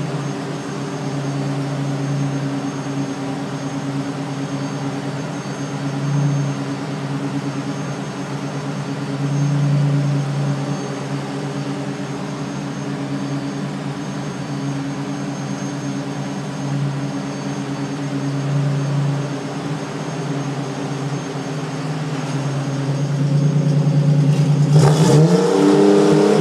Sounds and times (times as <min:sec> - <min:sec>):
Heavy engine (low frequency): 0:00.0 - 0:26.4
Vehicle: 0:00.0 - 0:26.4.